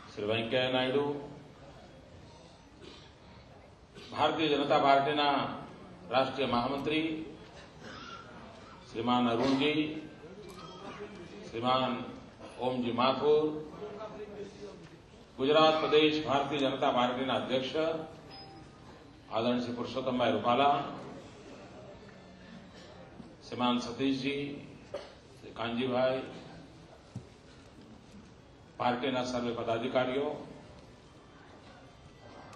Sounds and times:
Narration, monologue: 0.0 - 21.4, 22.7 - 31.0
Male speech, man speaking: 0.1 - 1.4, 4.1 - 7.4, 8.9 - 18.2, 19.3 - 21.1, 23.4 - 24.8, 25.4 - 26.6, 28.8 - 30.6.

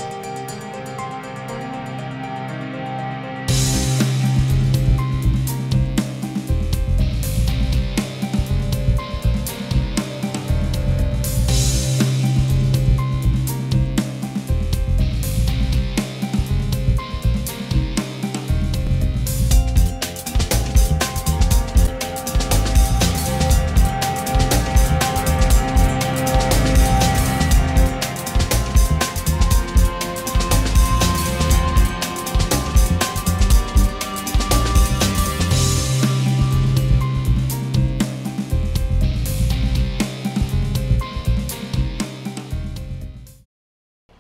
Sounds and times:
Music: 0.0 - 43.5.

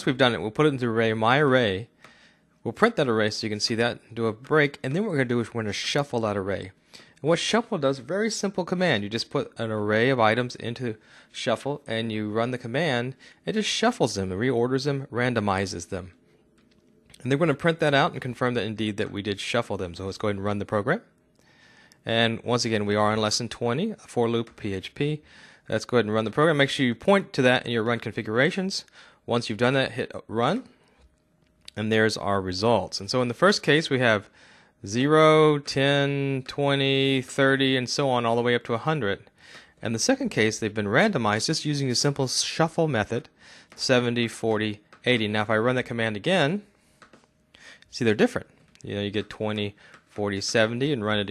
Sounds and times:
Speech: 0.0 - 1.9, 2.6 - 16.2, 17.2 - 21.1, 22.0 - 30.7, 31.7 - 46.7, 47.9 - 51.3.

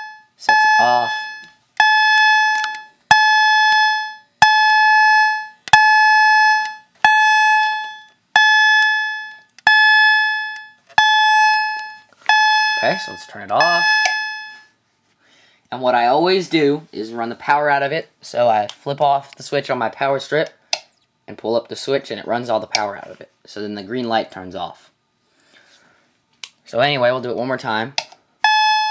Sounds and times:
Alarm: 0.0 - 14.8, 28.4 - 28.9
Speech: 12.8 - 13.9, 15.7 - 20.6, 21.3 - 24.9, 26.7 - 28.0.

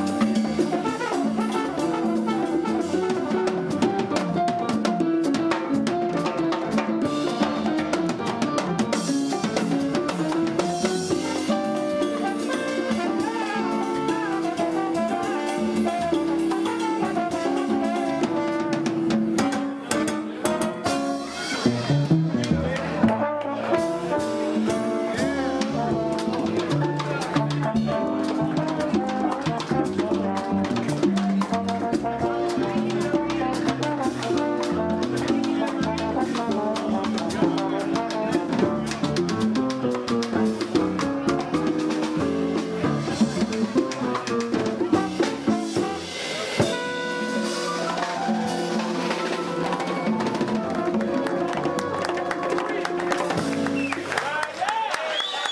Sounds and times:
Flamenco: 0.0 - 54.2
Speech: 21.3 - 39.5, 42.8 - 46.8, 54.2 - 55.1.

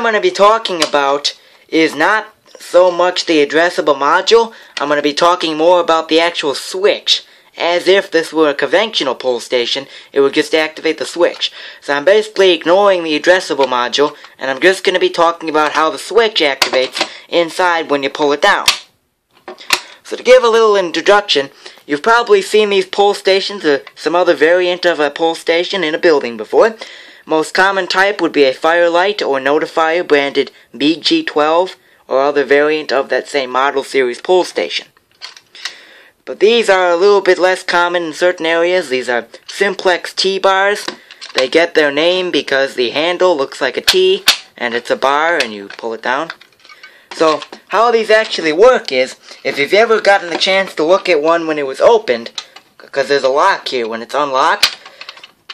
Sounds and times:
Speech: 0.0 - 18.8, 20.0 - 34.9, 36.3 - 46.4, 47.2 - 54.7.

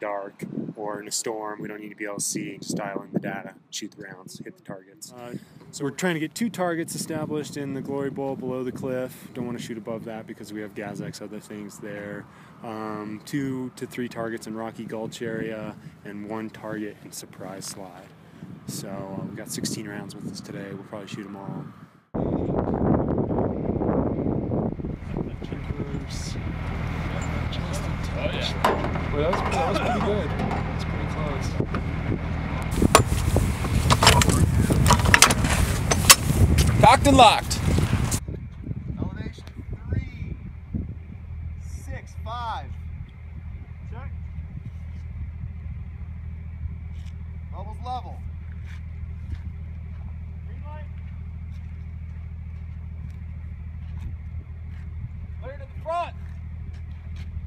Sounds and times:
Speech: 0.0 - 18.1, 18.7 - 21.7, 25.1 - 26.4, 27.2 - 31.6, 36.8 - 37.6, 39.0 - 40.3, 41.6 - 42.8, 43.9 - 44.2, 47.5 - 48.2, 50.5 - 50.9, 55.4 - 56.2
Outside, rural or natural: 0.0 - 57.4.

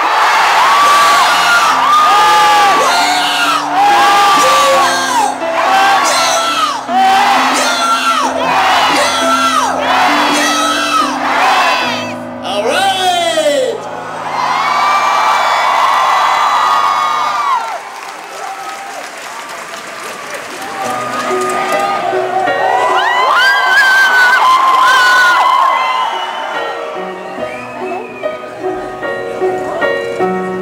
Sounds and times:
Music: 0.1 - 16.0, 20.5 - 30.6
Speech: 12.4 - 13.8.

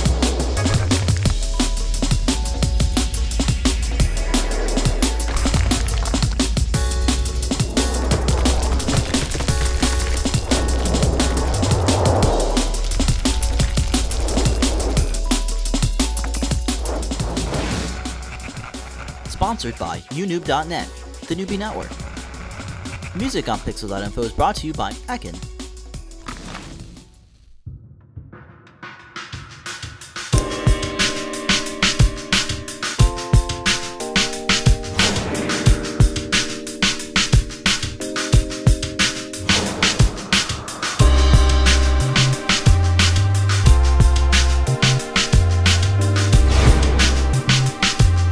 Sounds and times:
Music: 0.0 - 48.3
Speech: 19.3 - 21.9, 23.2 - 25.4.

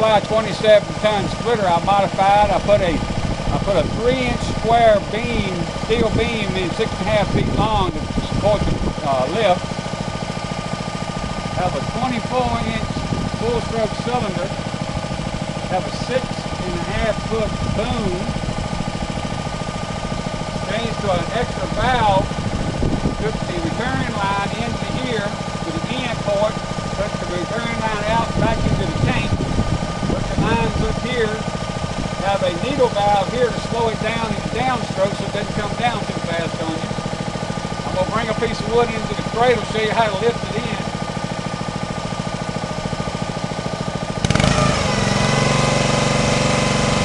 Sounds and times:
Speech: 0.0 - 9.6, 11.6 - 14.5, 15.7 - 18.3, 20.7 - 22.3, 23.2 - 29.4, 30.2 - 31.5, 32.2 - 36.9, 37.8 - 40.9.

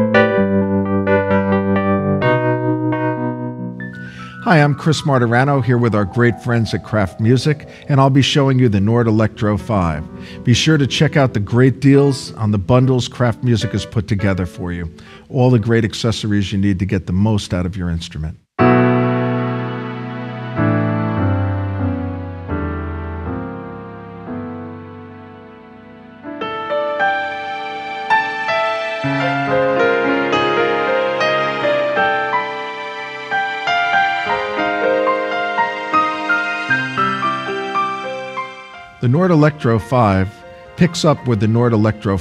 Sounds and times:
Music: 0.0 - 16.9, 18.6 - 42.2
Speech: 4.4 - 18.4, 39.0 - 42.2.

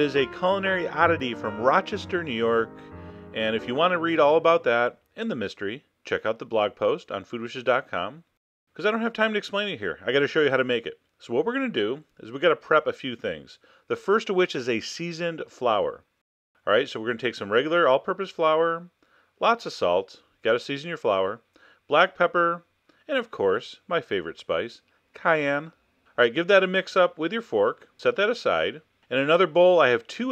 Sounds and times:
Speech: 0.0 - 2.8, 3.4 - 30.3.

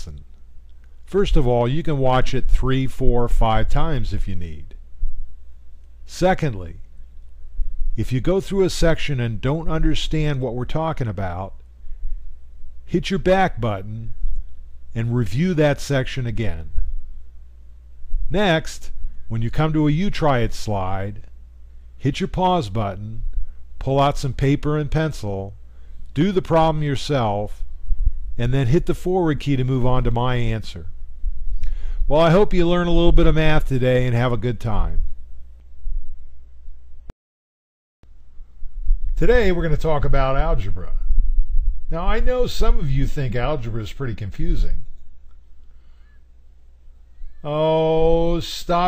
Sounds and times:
Speech: 0.0 - 0.3, 1.1 - 4.8, 6.1 - 6.8, 8.0 - 11.6, 12.9 - 14.2, 15.0 - 16.8, 18.3 - 21.3, 22.0 - 25.6, 26.2 - 27.7, 28.4 - 31.0, 32.1 - 35.2, 39.2 - 41.1, 41.9 - 44.9, 47.4 - 48.8.

